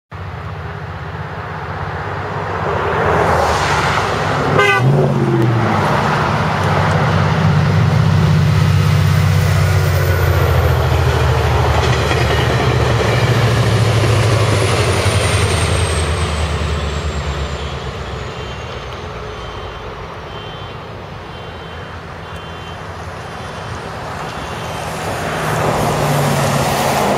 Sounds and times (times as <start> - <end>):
Railroad car, train wagon: 0.1 - 27.1
Train: 0.1 - 27.1
Vehicle horn, car horn, honking: 4.6 - 4.9, 19.4 - 24.8.